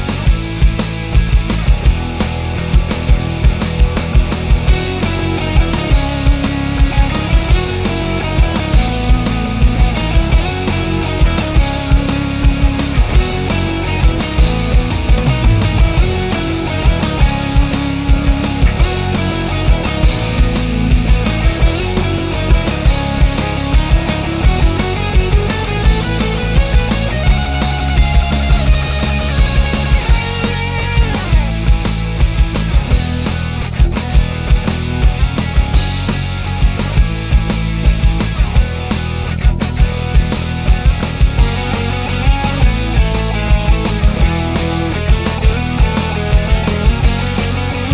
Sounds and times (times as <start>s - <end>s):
Music: 0.0s - 47.9s.